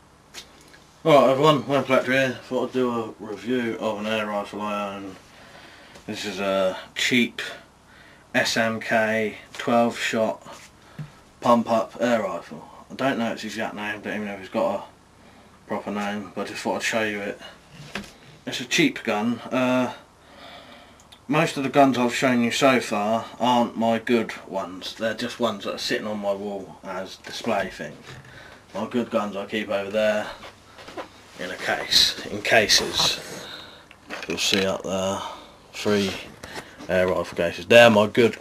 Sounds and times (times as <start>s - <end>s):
Speech: 1.0s - 5.2s, 6.1s - 7.6s, 8.4s - 10.6s, 11.4s - 14.9s, 15.7s - 17.5s, 18.4s - 20.0s, 21.3s - 28.1s, 28.8s - 30.4s, 31.4s - 33.4s, 34.2s - 38.4s.